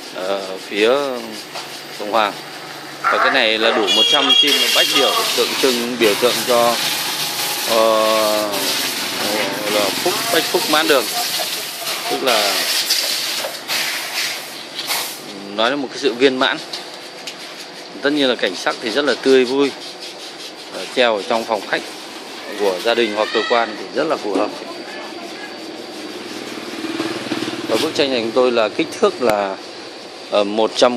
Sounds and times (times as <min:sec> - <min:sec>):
Speech: 0:00.2 - 0:01.4, 0:03.0 - 0:06.8, 0:07.7 - 0:12.7, 0:18.0 - 0:19.8, 0:27.7 - 0:29.6, 0:30.3 - 0:30.9.